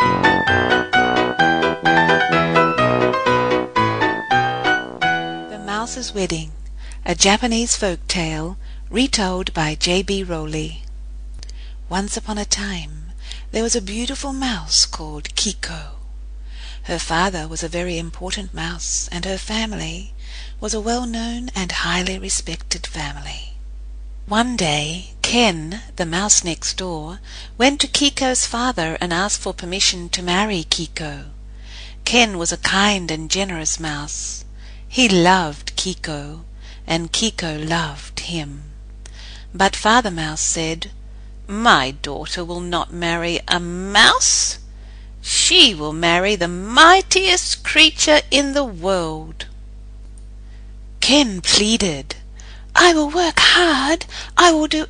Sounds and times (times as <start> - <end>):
Speech: 5.5 - 16.0, 16.8 - 23.6, 24.3 - 31.4, 32.0 - 38.8, 39.5 - 49.5, 51.0 - 52.2, 52.8 - 54.9.